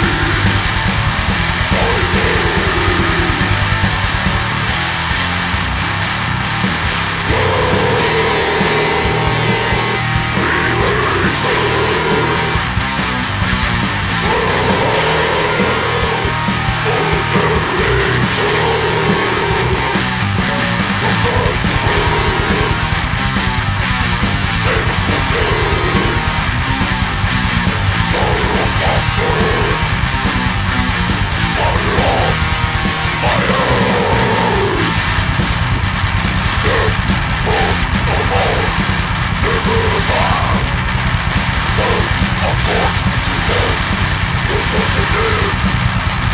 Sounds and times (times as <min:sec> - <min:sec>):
Music: 0:00.0 - 0:46.3.